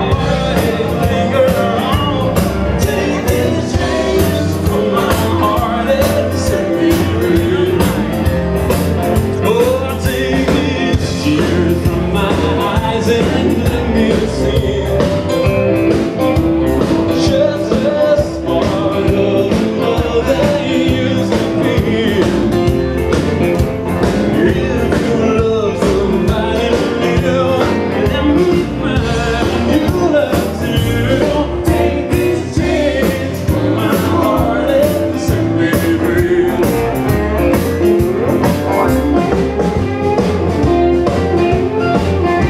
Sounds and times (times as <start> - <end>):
Music: 0.0 - 42.5.